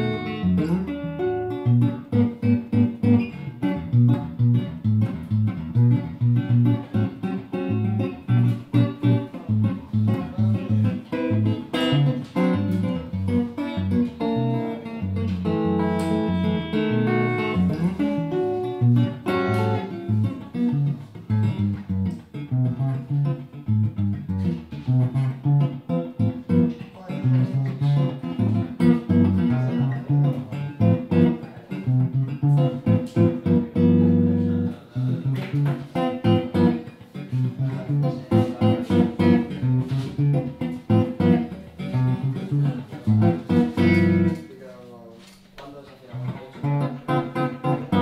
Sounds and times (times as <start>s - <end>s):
Bass guitar: 0.0s - 44.6s, 46.0s - 48.0s
Strum: 0.0s - 44.8s.